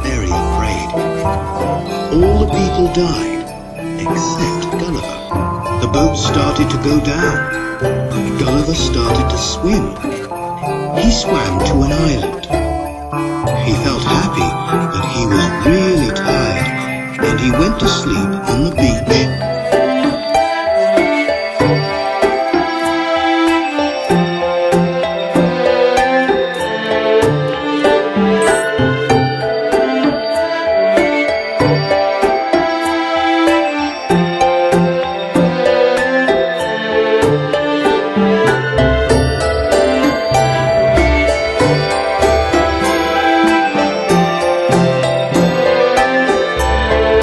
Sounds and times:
Speech: 0:00.0 - 0:01.0, 0:02.1 - 0:03.4, 0:04.0 - 0:05.2, 0:05.8 - 0:07.5, 0:08.3 - 0:10.2, 0:11.0 - 0:12.6, 0:13.6 - 0:19.4
Independent music: 0:00.0 - 0:47.2.

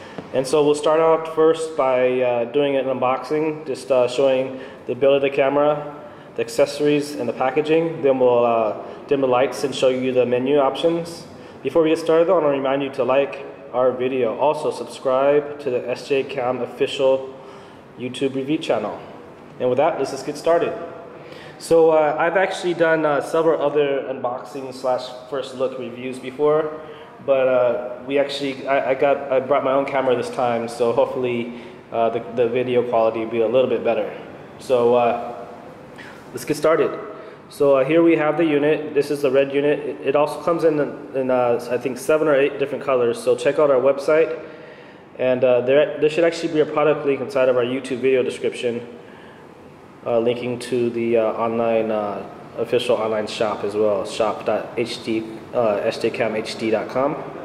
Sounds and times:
Speech: 0:00.0 - 0:17.4, 0:18.0 - 0:20.9, 0:21.5 - 0:35.4, 0:36.3 - 0:44.4, 0:45.2 - 0:49.0, 0:50.0 - 0:57.4.

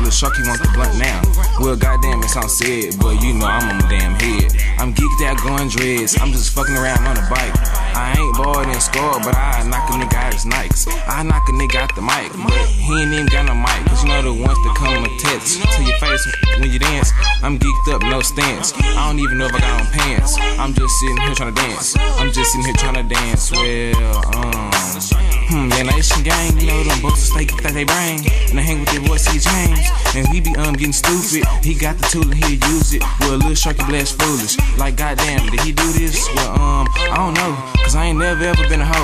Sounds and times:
Hip hop music: 0:00.0 - 0:39.0
Singing: 0:00.0 - 0:39.0.

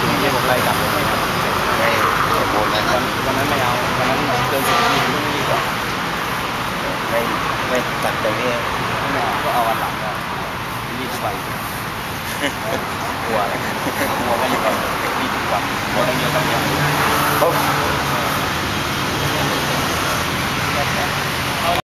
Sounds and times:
Speech: 0:00.0 - 0:05.7, 0:06.8 - 0:10.2, 0:10.9 - 0:11.4, 0:12.6 - 0:18.4, 0:19.2 - 0:20.0, 0:20.6 - 0:21.8.

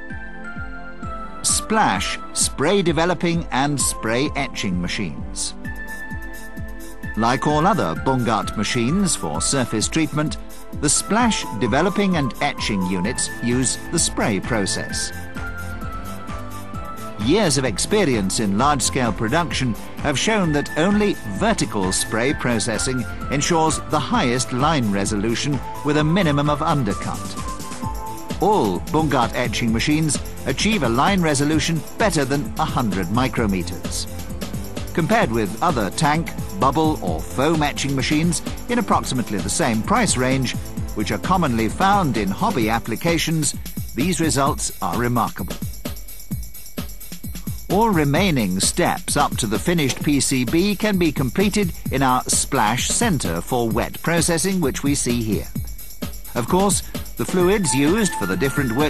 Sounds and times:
Music: 0:00.0 - 0:58.9
Speech: 0:01.4 - 0:05.6, 0:07.2 - 0:15.2, 0:17.2 - 0:27.4, 0:28.4 - 0:34.1, 0:35.0 - 0:45.5, 0:47.7 - 0:55.5, 0:56.4 - 0:58.9.

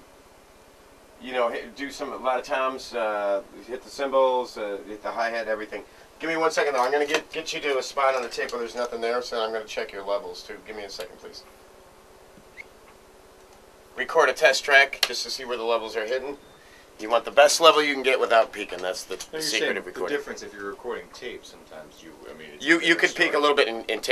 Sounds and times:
Speech: 0:01.2 - 0:11.5, 0:14.0 - 0:16.4, 0:17.0 - 0:24.1.

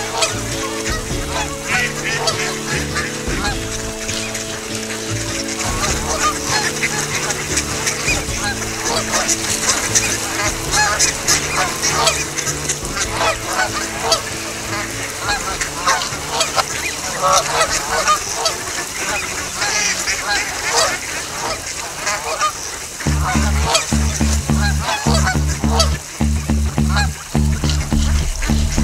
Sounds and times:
Music: 0:00.0 - 0:22.4, 0:23.0 - 0:28.8
Outside, rural or natural: 0:00.0 - 0:28.8.

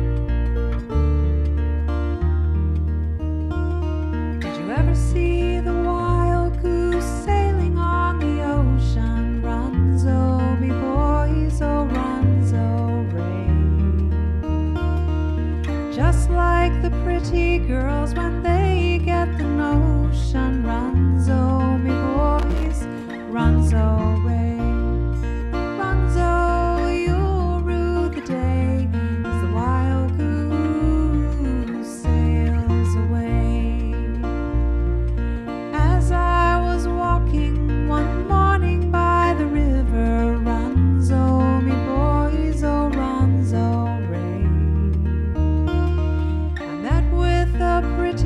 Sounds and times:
Music: 0:00.0 - 0:48.2.

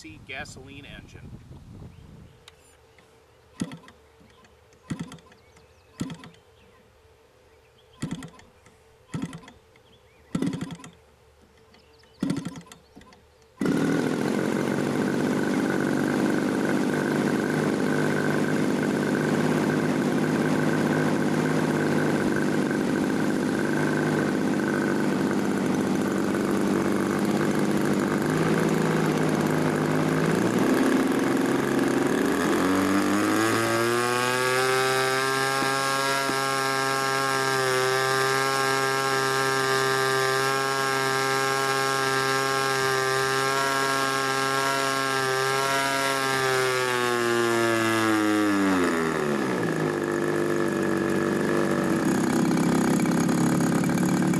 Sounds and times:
Engine starting: 0:03.6 - 0:04.0, 0:04.9 - 0:05.4, 0:06.0 - 0:06.4, 0:08.0 - 0:08.5, 0:09.1 - 0:09.6, 0:10.3 - 0:11.0, 0:12.1 - 0:12.9.

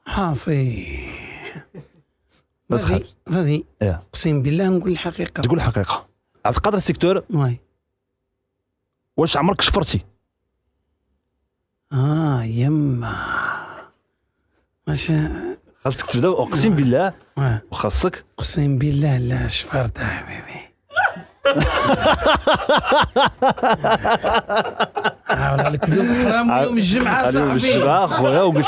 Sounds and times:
Speech: 0:00.0 - 0:01.4, 0:02.7 - 0:07.7, 0:09.2 - 0:10.1, 0:14.9 - 0:20.5, 0:25.3 - 0:28.6.

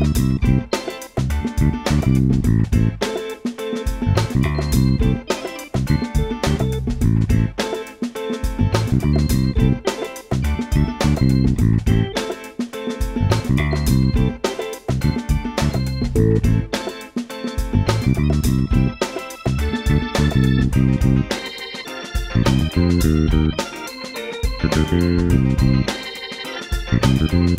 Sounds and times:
Music: 0:00.0 - 0:27.5.

